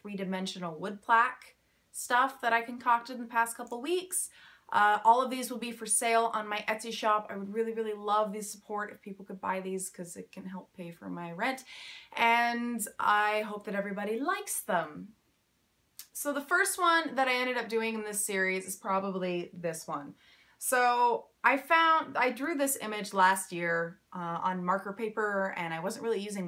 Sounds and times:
Speech: 0:00.0 - 0:15.1, 0:16.0 - 0:26.4.

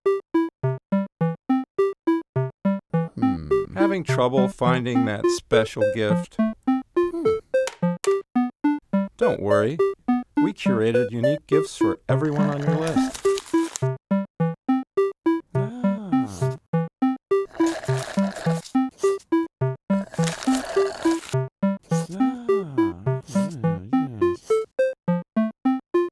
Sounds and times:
Music: 0:00.1 - 0:26.1
Speech: 0:03.2 - 0:06.4, 0:09.2 - 0:09.8, 0:10.4 - 0:13.1, 0:21.9 - 0:24.4.

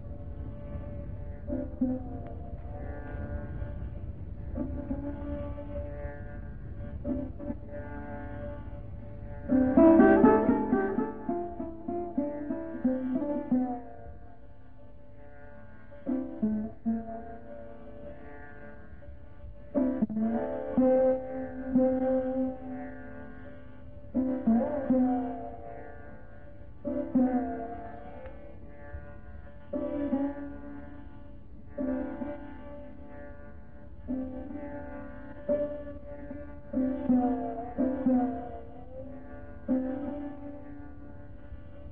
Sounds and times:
Carnatic music: 0:00.0 - 0:41.9
Classical music: 0:09.5 - 0:13.5.

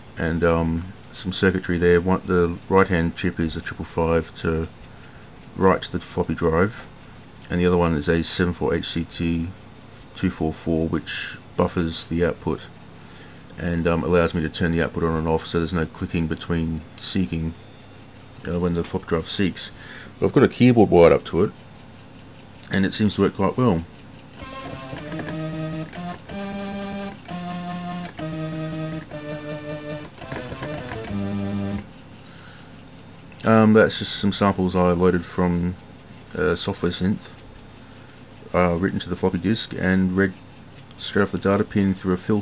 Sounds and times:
Sampler: 0:24.4 - 0:32.0.

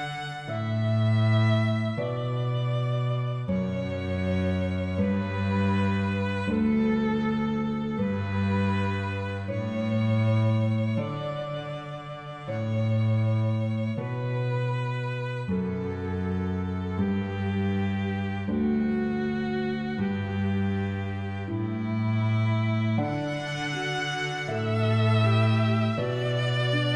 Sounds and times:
Classical music: 0:00.0 - 0:26.9.

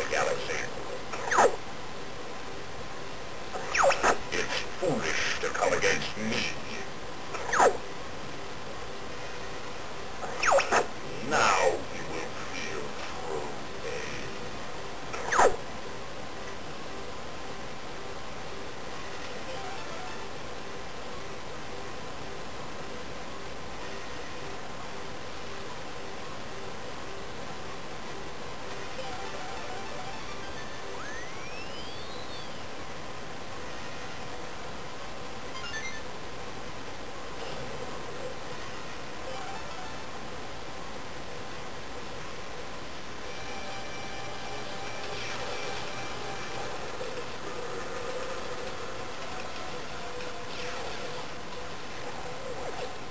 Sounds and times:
Speech: 0:00.0 - 0:00.8, 0:03.9 - 0:06.9, 0:11.1 - 0:14.4.

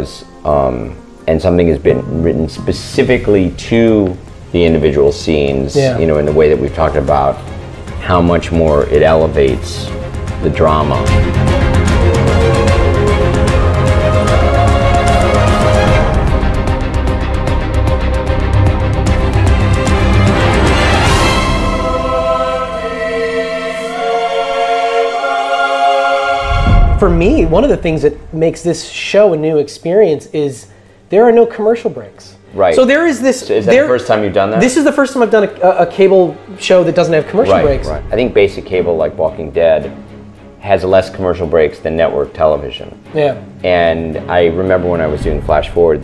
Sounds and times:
Speech: 0:00.0 - 0:07.4, 0:08.0 - 0:11.1, 0:27.0 - 0:39.9, 0:40.6 - 0:46.0
Bowed string instrument: 0:00.0 - 0:46.0.

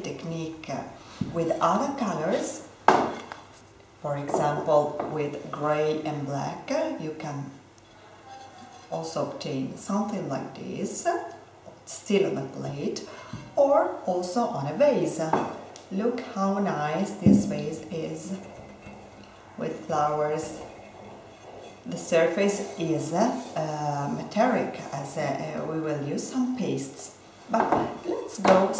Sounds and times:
Speech: 0:00.0 - 0:02.7, 0:04.0 - 0:07.6, 0:08.9 - 0:18.5, 0:19.6 - 0:20.6, 0:21.9 - 0:28.7.

